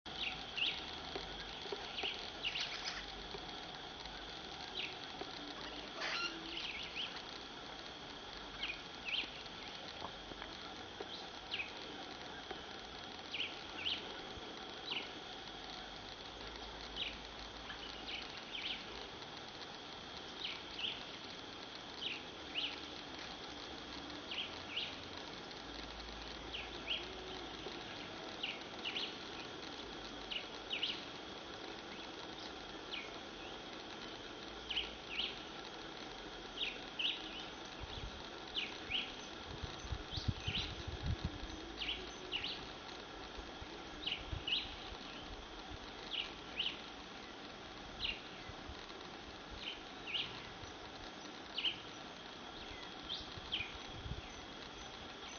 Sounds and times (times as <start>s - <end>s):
Bird: 1.8s - 3.2s, 5.6s - 7.2s.